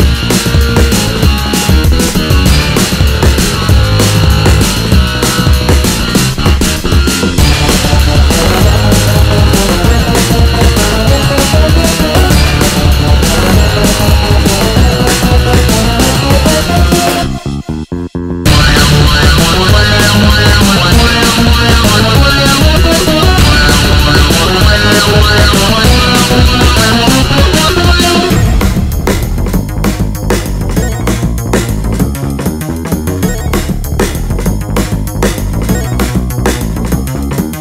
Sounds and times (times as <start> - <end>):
Music: 0.0 - 37.6.